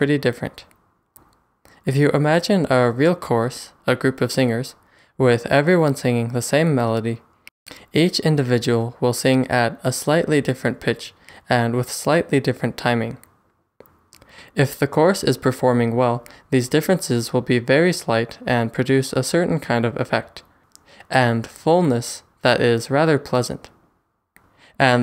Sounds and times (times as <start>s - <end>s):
Speech: 0.0s - 0.8s, 1.8s - 13.3s, 14.5s - 23.8s, 24.8s - 25.0s.